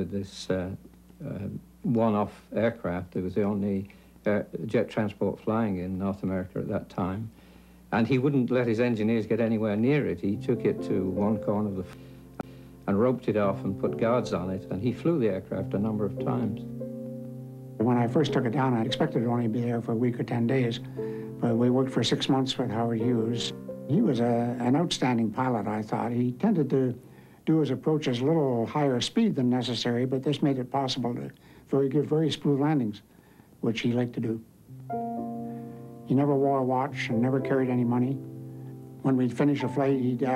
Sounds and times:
Speech: 0:00.0 - 0:12.0, 0:12.9 - 0:16.7, 0:17.8 - 0:34.5, 0:36.1 - 0:38.2, 0:39.0 - 0:40.3
Music: 0:08.9 - 0:28.6, 0:34.7 - 0:40.3.

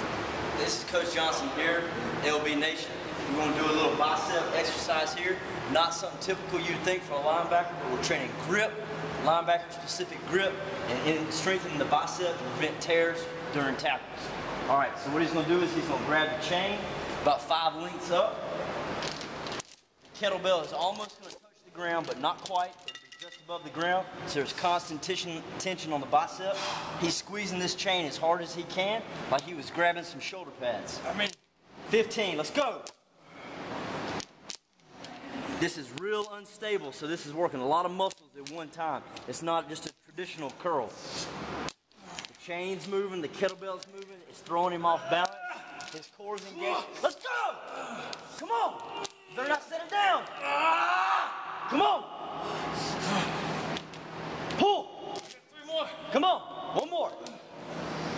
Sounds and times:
Speech: 0:42.4 - 0:47.6.

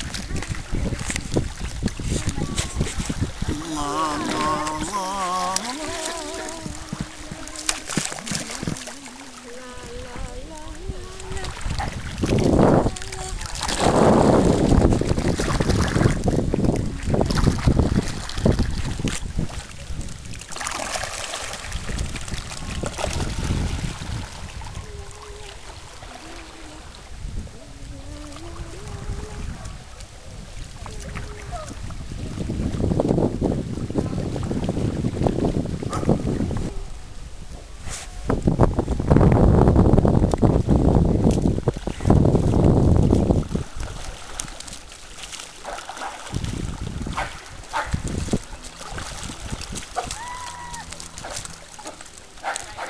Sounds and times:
Sailboat, sailing ship: 0:00.0 - 0:52.9.

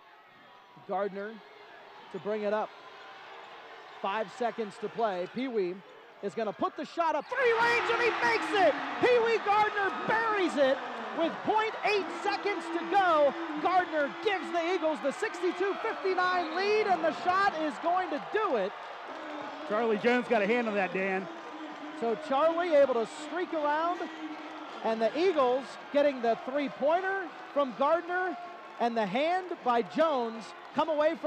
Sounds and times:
Speech: 0:04.0 - 0:18.7, 0:19.6 - 0:21.3, 0:22.0 - 0:24.2, 0:24.8 - 0:31.2.

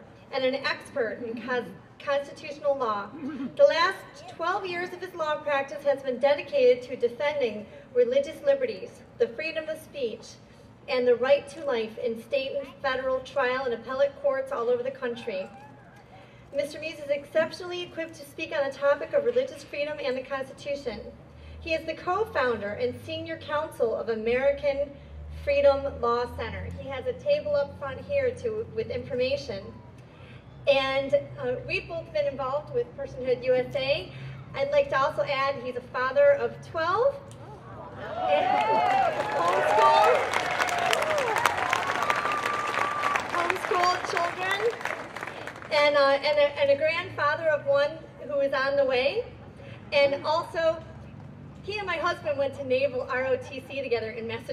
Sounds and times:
Female speech, woman speaking: 0:00.3 - 0:15.6, 0:16.6 - 0:21.1, 0:21.7 - 0:29.7, 0:30.7 - 0:37.2, 0:43.4 - 0:44.8, 0:45.7 - 0:49.3, 0:50.0 - 0:50.8, 0:51.7 - 0:54.5.

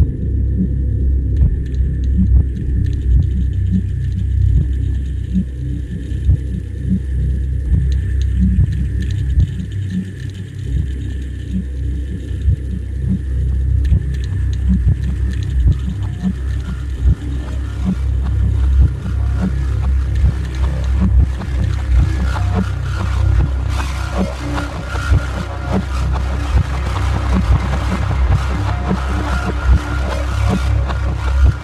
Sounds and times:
Rumble: 0:00.0 - 0:31.6.

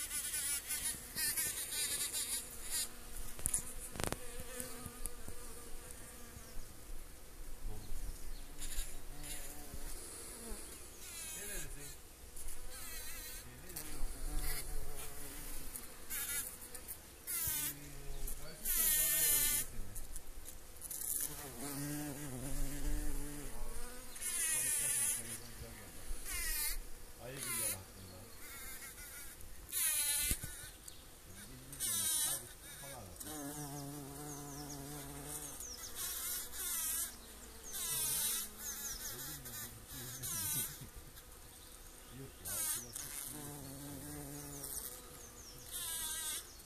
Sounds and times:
Bee, wasp, etc.: 0:00.0 - 0:46.6
Fly, housefly: 0:00.0 - 0:46.6.

